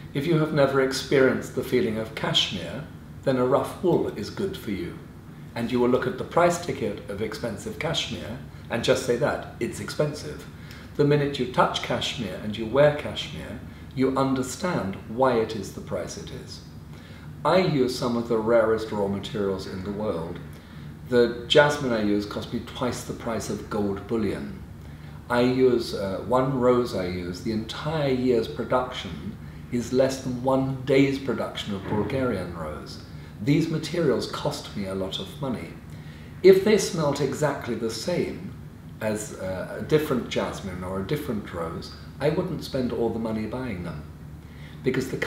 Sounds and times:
Speech: 0:00.0 - 0:16.7, 0:17.4 - 0:20.5, 0:21.1 - 0:35.8, 0:36.4 - 0:44.1, 0:44.8 - 0:45.2.

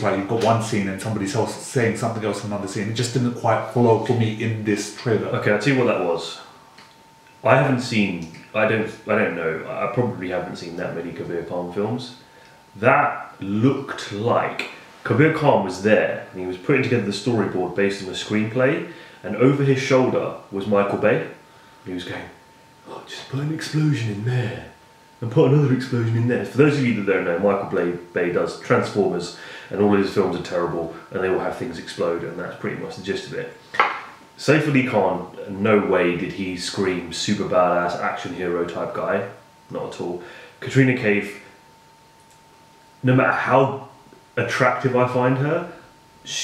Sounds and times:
Speech: 0:00.0 - 0:06.5, 0:07.4 - 0:41.6, 0:43.0 - 0:46.4
Inside, small room: 0:00.0 - 0:46.4.

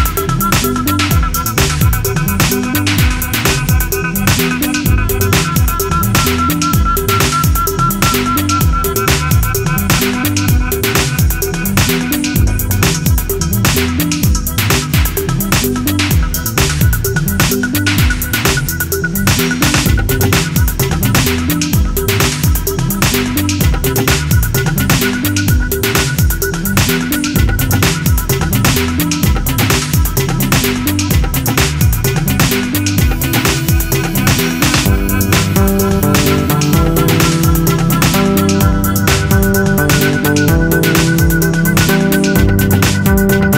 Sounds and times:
Inside, small room: 0:00.0 - 0:43.5
Music: 0:00.0 - 0:43.5.

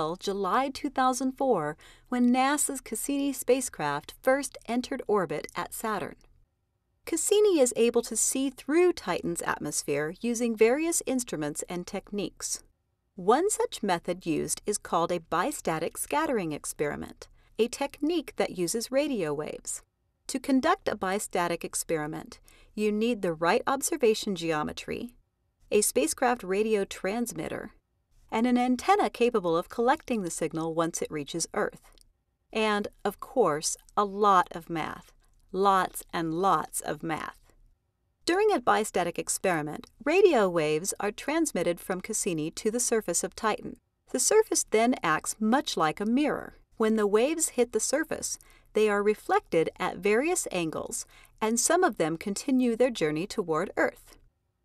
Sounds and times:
Speech: 0:00.0 - 0:06.2, 0:07.1 - 0:12.6, 0:13.2 - 0:31.9, 0:32.6 - 0:37.4, 0:38.3 - 0:54.2.

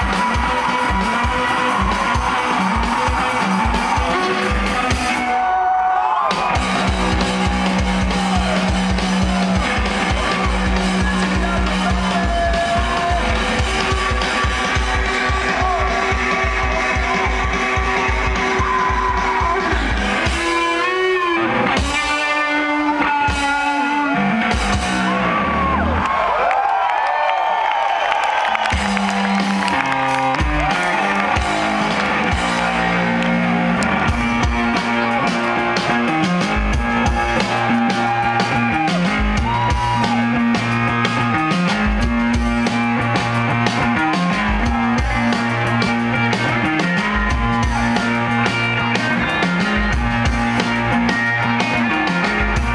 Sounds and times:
Cheering: 0:00.0 - 0:52.7
Music: 0:00.0 - 0:52.7
Clapping: 0:26.0 - 0:34.0.

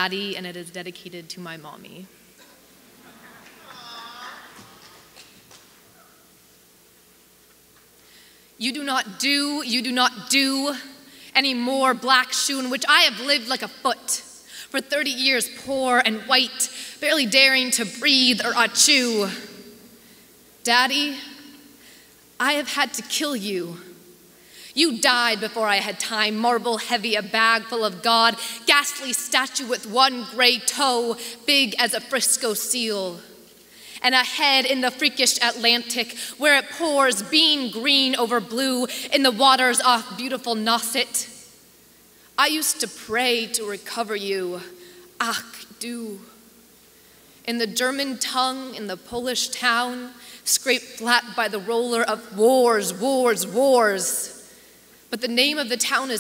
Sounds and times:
Speech: 0:00.0 - 0:02.1, 0:08.6 - 0:19.5, 0:22.4 - 0:23.9, 0:24.8 - 0:33.3, 0:34.0 - 0:41.4, 0:42.4 - 0:46.3, 0:47.5 - 0:54.4, 0:55.1 - 0:56.2.

